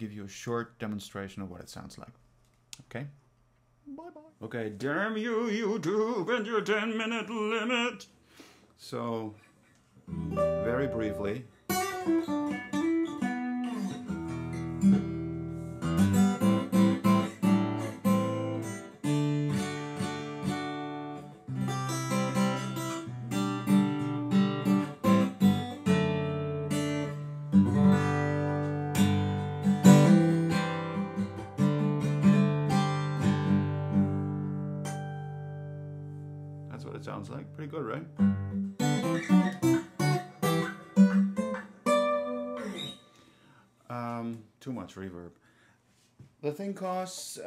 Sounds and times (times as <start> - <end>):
Strum: 10.1 - 43.2.